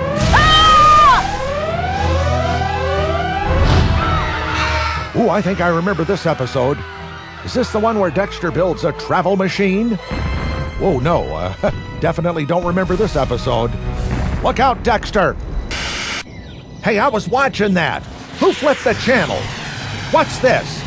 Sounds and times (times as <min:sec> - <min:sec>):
Music: 0:00.0 - 0:15.7
Speech: 0:05.2 - 0:06.8, 0:07.5 - 0:10.0, 0:10.8 - 0:13.7, 0:14.4 - 0:15.4, 0:16.8 - 0:19.5, 0:20.1 - 0:20.8.